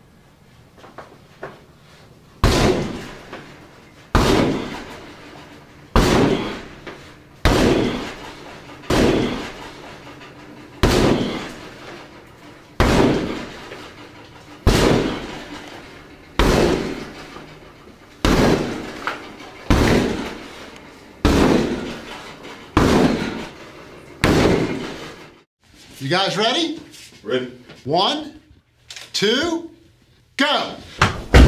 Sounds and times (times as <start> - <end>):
Speech: 26.0 - 28.5, 29.1 - 29.8, 30.4 - 30.9.